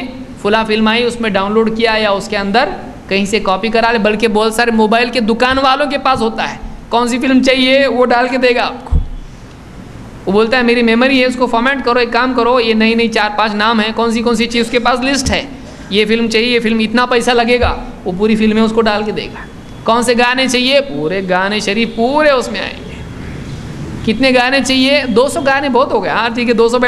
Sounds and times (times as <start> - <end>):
Speech: 0.0 - 9.0, 10.3 - 22.9, 24.1 - 26.8.